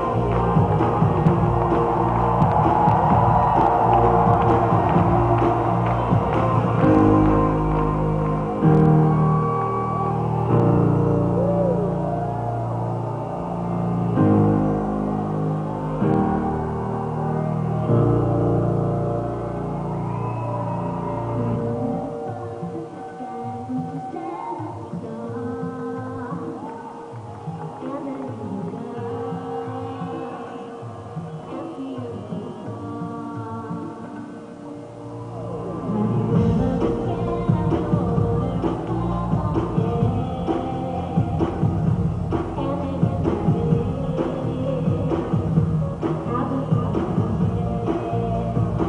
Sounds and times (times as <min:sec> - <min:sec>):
Music: 0:00.0 - 0:48.8.